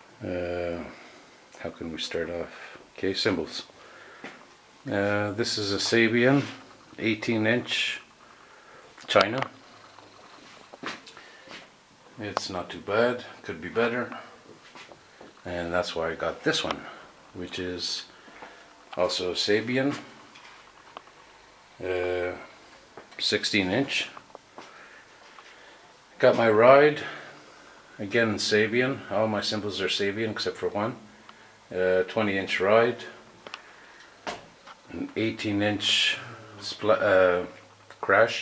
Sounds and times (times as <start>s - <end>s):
Speech: 0.2s - 1.0s, 1.6s - 3.8s, 4.8s - 8.1s, 9.0s - 9.6s, 12.2s - 14.4s, 15.4s - 18.2s, 19.0s - 20.2s, 21.8s - 24.2s, 26.2s - 27.4s, 28.0s - 31.1s, 31.7s - 33.2s, 34.9s - 38.4s.